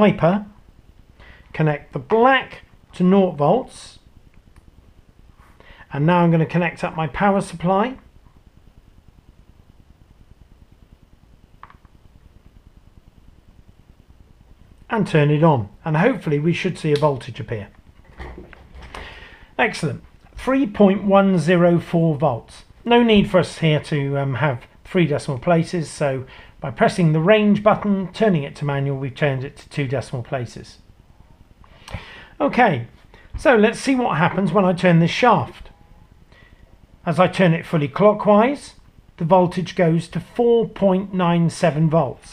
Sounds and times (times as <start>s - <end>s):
Speech: 0.0s - 0.6s, 1.5s - 4.1s, 5.9s - 8.1s, 14.9s - 17.8s, 19.6s - 30.9s, 32.4s - 35.7s, 37.0s - 42.3s.